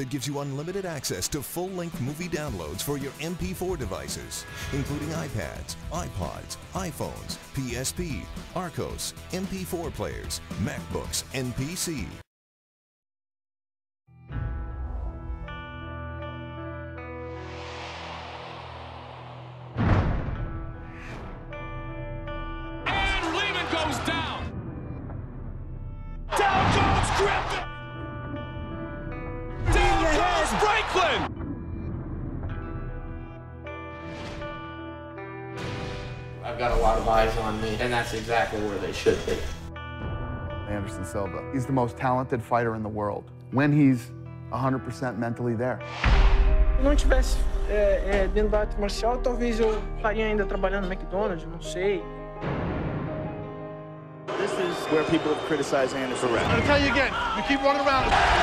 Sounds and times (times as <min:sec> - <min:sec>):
Speech: 0:00.0 - 0:12.2, 0:36.4 - 0:39.5, 0:40.7 - 0:45.8, 0:46.8 - 0:52.0
Music: 0:00.0 - 0:12.3, 0:14.1 - 0:58.4.